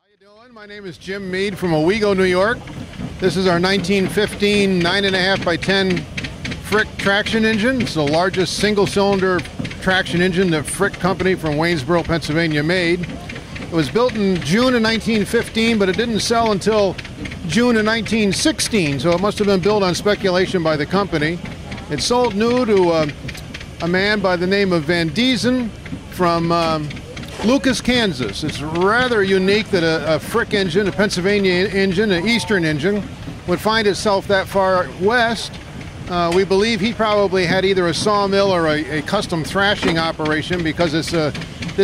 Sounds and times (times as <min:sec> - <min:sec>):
Speech: 0:00.2 - 0:02.6, 0:03.2 - 0:06.0, 0:06.7 - 0:23.2, 0:23.8 - 0:41.8.